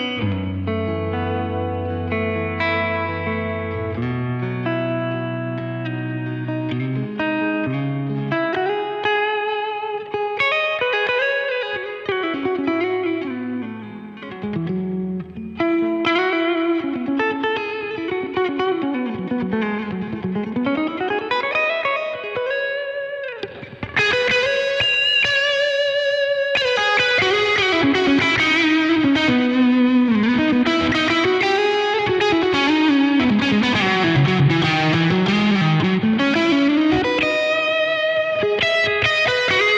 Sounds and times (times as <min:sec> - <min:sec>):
Music: 0:00.0 - 0:39.7.